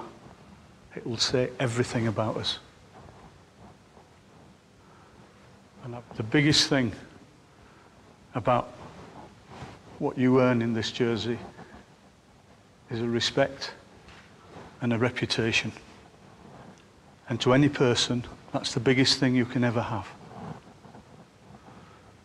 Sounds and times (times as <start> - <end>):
Narration, monologue: 0.0 - 22.2
Male speech, man speaking: 0.9 - 2.7, 5.8 - 7.1, 8.4 - 8.7, 10.0 - 11.5, 12.9 - 13.8, 14.8 - 15.8, 17.3 - 20.2.